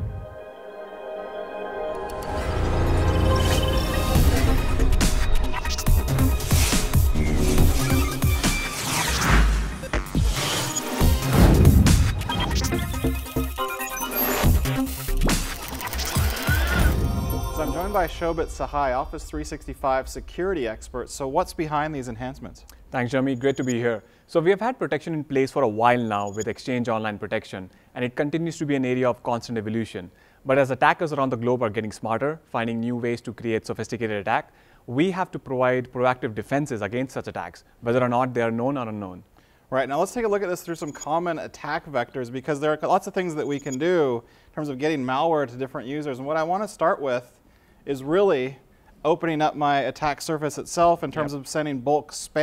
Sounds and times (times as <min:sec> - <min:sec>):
Music: 0:00.0 - 0:19.9.